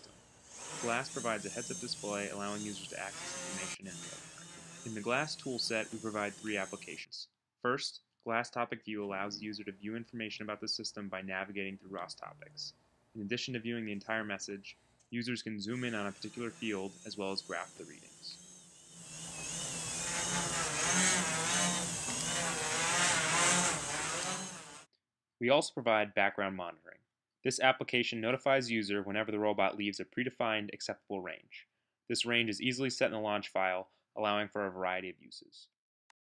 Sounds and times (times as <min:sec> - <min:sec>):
Speech: 0:00.8 - 0:04.1, 0:04.9 - 0:18.4, 0:25.4 - 0:35.7.